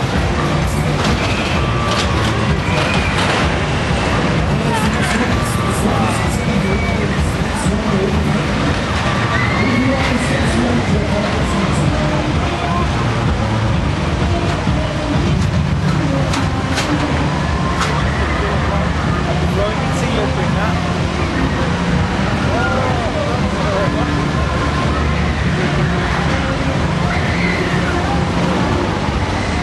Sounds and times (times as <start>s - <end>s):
Speech: 4.4s - 13.4s, 18.2s - 21.2s, 22.4s - 28.7s.